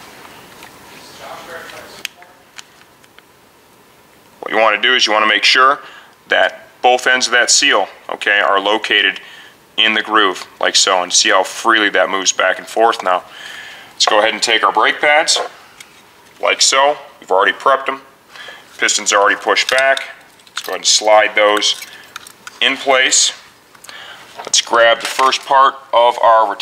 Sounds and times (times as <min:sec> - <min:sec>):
Speech: 0:01.0 - 0:02.5, 0:04.4 - 0:09.2, 0:09.8 - 0:13.3, 0:14.0 - 0:15.5, 0:16.4 - 0:18.1, 0:18.8 - 0:21.8, 0:22.6 - 0:23.5, 0:24.4 - 0:26.6.